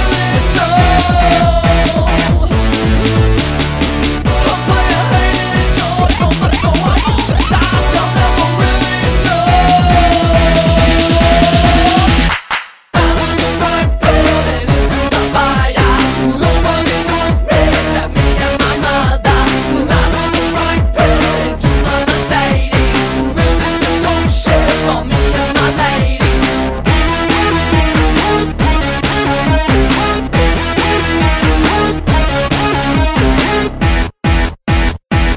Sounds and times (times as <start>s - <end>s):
Music: 0.0s - 35.3s.